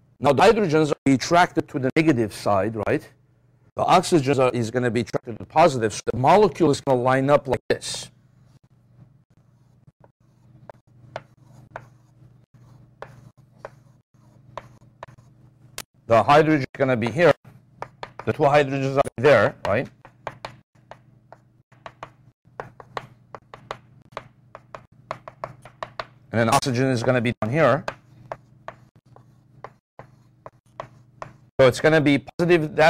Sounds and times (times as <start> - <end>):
Speech: 0.2 - 3.2, 3.8 - 8.1, 16.1 - 17.4, 18.2 - 20.0, 26.3 - 27.9, 31.6 - 32.8.